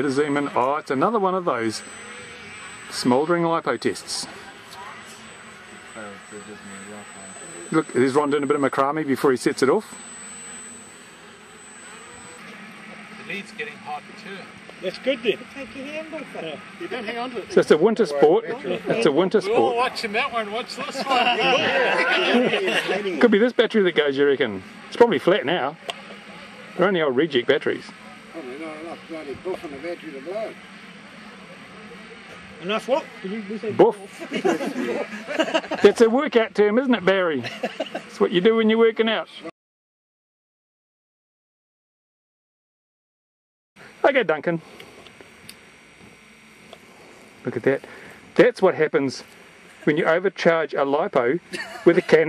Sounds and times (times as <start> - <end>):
Speech: 0.0 - 1.8, 7.7 - 9.8, 22.6 - 25.8, 26.8 - 30.6, 35.8 - 37.5, 38.1 - 39.5, 44.0 - 44.6, 47.5 - 47.8, 48.4 - 49.2, 49.8 - 52.2
Outside, rural or natural: 0.0 - 36.2.